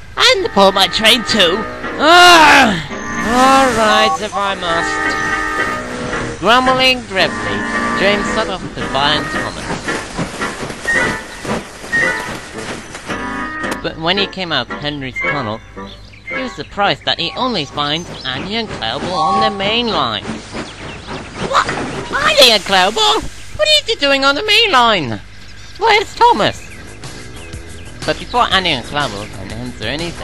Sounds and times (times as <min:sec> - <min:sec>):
Speech: 0:06.4 - 0:09.7, 0:13.8 - 0:15.6, 0:16.4 - 0:20.3, 0:21.5 - 0:25.2, 0:25.8 - 0:26.7, 0:28.0 - 0:30.2.